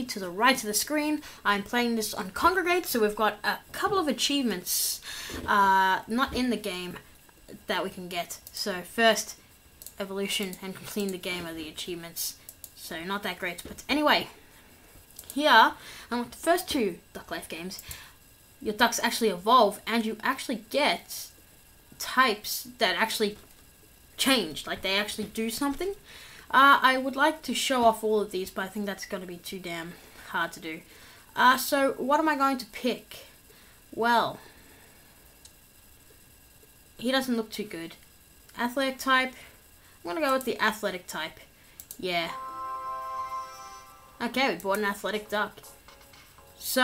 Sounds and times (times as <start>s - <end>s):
Speech: 0.0s - 7.0s, 7.6s - 9.4s, 10.0s - 14.4s, 15.4s - 17.8s, 18.6s - 21.4s, 22.0s - 23.4s, 24.2s - 33.3s, 34.0s - 34.4s, 37.0s - 38.0s, 38.6s - 39.5s, 40.1s - 42.4s, 44.2s - 45.7s.